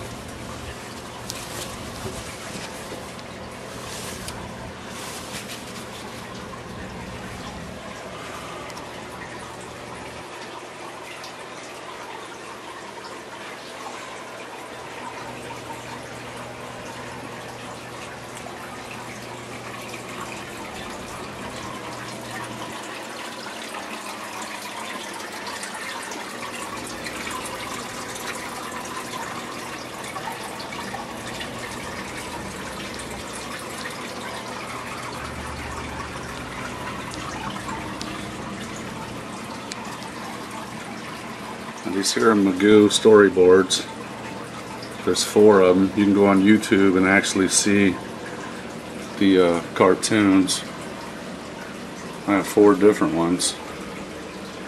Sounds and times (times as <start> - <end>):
Liquid: 0.0 - 54.6.